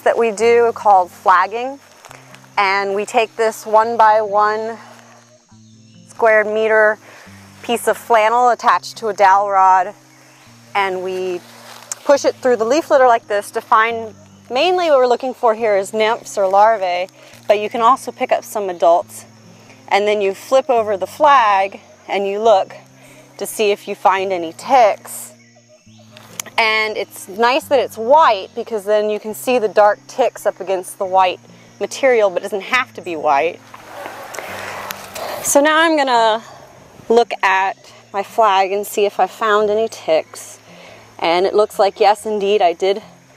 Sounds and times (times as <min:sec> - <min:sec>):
Speech: 0:02.6 - 0:04.8, 0:12.0 - 0:19.2, 0:26.6 - 0:33.6, 0:37.1 - 0:40.6, 0:41.2 - 0:43.0.